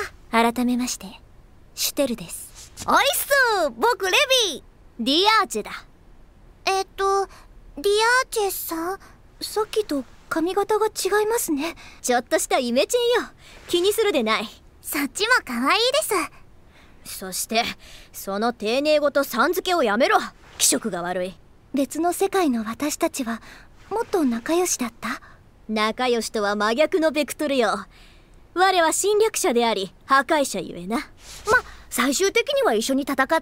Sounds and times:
Speech: 0.0s - 1.2s, 1.8s - 5.9s, 6.6s - 16.3s, 17.1s - 27.9s, 28.6s - 33.4s.

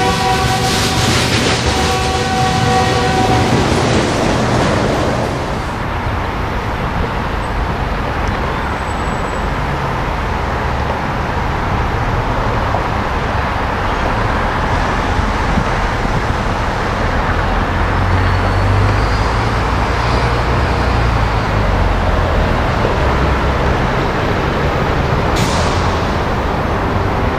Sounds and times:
Outside, urban or manmade: 0.0s - 27.3s
Railroad car, train wagon: 0.0s - 27.3s
Train: 0.0s - 27.3s.

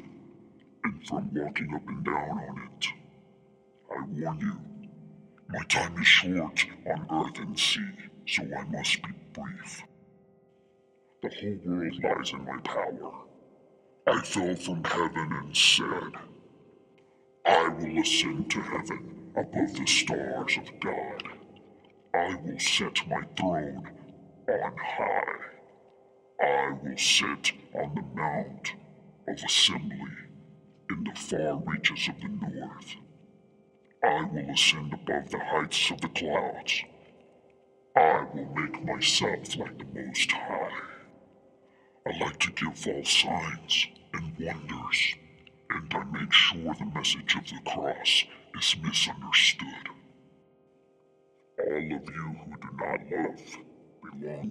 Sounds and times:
Male speech, man speaking: 0.8s - 3.0s, 3.9s - 4.9s, 5.5s - 9.9s, 11.2s - 13.3s, 14.1s - 16.4s, 17.5s - 21.5s, 22.2s - 25.6s, 26.4s - 30.3s, 30.9s - 33.0s, 34.0s - 36.9s, 38.0s - 41.1s, 42.1s - 50.0s, 51.6s - 54.5s
Speech synthesizer: 0.8s - 3.0s, 3.9s - 4.9s, 5.5s - 9.9s, 11.2s - 13.3s, 14.1s - 16.3s, 17.5s - 21.4s, 22.2s - 25.6s, 26.4s - 30.3s, 30.9s - 33.0s, 34.0s - 36.9s, 38.0s - 41.1s, 42.1s - 50.0s, 51.6s - 54.5s.

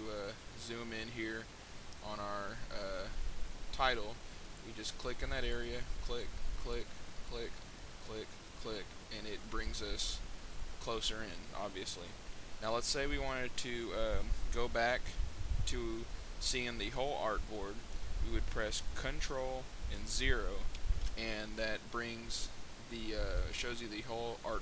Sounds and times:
Speech: 0.0s - 10.2s, 10.8s - 24.6s.

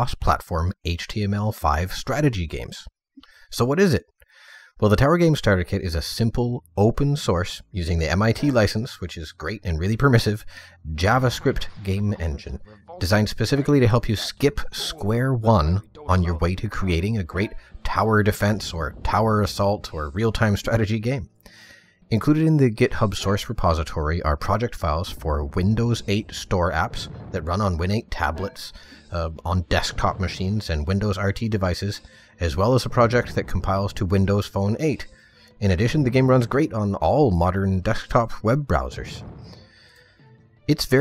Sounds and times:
Speech: 0.0s - 21.3s, 22.1s - 39.2s, 40.7s - 41.0s.

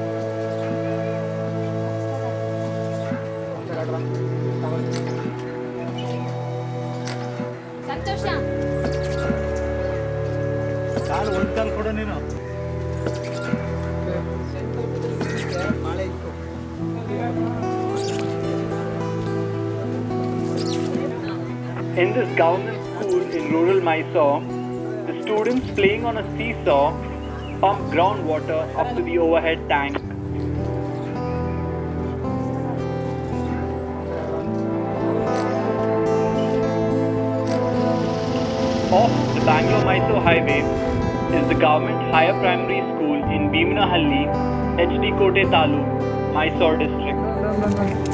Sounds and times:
Music: 0.0s - 48.1s.

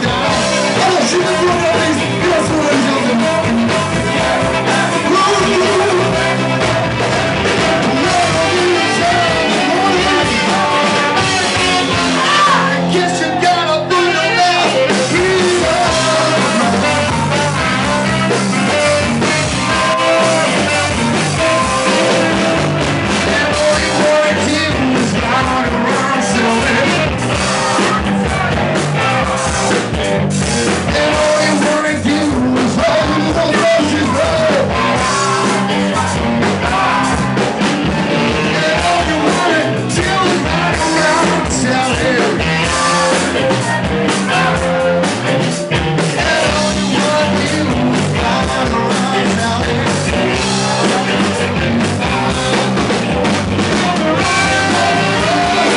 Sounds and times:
Blues: 0.0s - 55.7s.

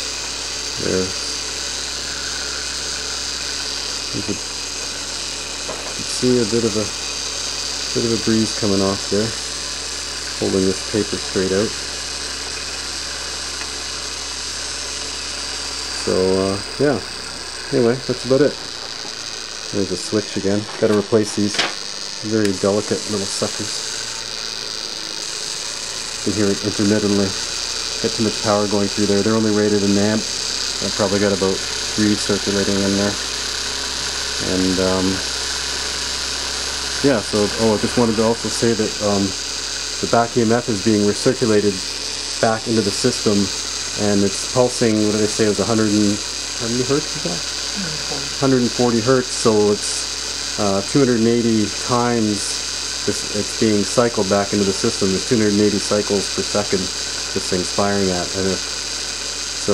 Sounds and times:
Speech: 0.8s - 1.3s, 4.1s - 4.4s, 6.0s - 7.0s, 8.0s - 9.4s, 10.4s - 11.8s, 16.0s - 17.1s, 17.7s - 18.6s, 19.8s - 23.8s, 26.2s - 27.4s, 28.0s - 33.2s, 34.4s - 35.3s, 37.0s - 39.4s, 40.0s - 50.0s, 50.6s - 58.7s.

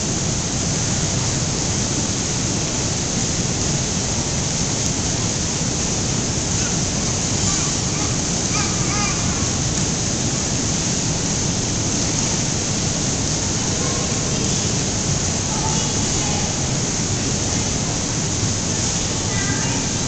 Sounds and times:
Waterfall: 0.0s - 20.0s.

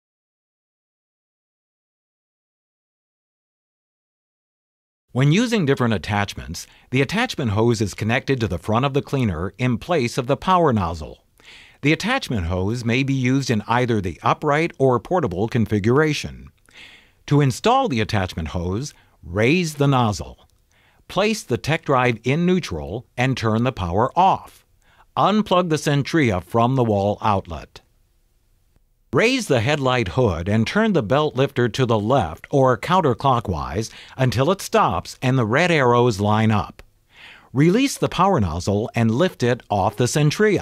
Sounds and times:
Speech: 5.2s - 11.2s, 11.8s - 16.5s, 17.3s - 20.5s, 21.1s - 24.6s, 25.2s - 27.9s, 29.1s - 36.8s, 37.5s - 40.6s.

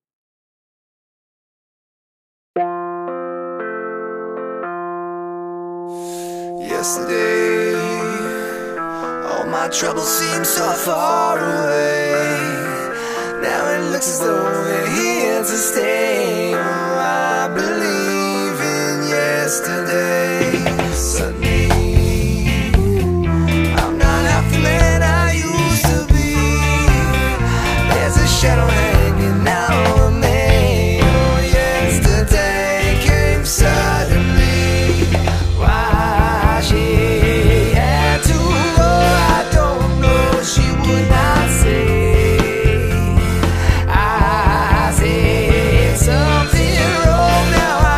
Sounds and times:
Drum: 20.5s - 25.1s, 25.8s - 47.9s.

